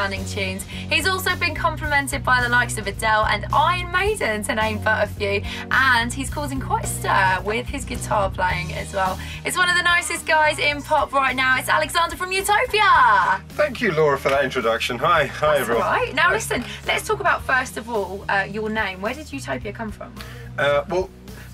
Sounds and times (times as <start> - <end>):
Speech: 0.0 - 21.1
Soundtrack music: 0.0 - 21.5.